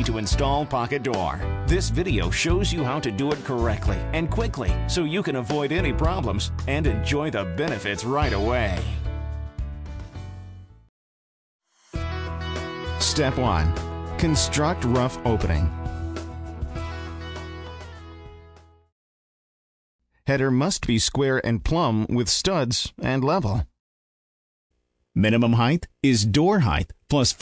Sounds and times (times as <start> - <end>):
Speech: 0.0 - 9.1, 13.0 - 15.8, 20.3 - 23.7, 25.2 - 27.4
Music: 0.0 - 10.9, 11.6 - 18.9.